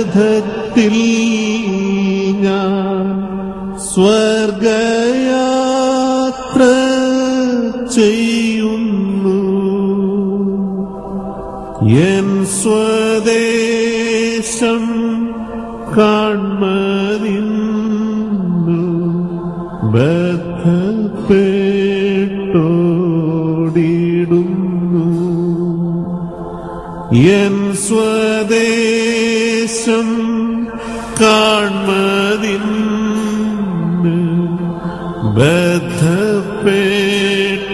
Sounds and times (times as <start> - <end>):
Music: 0.0 - 37.7.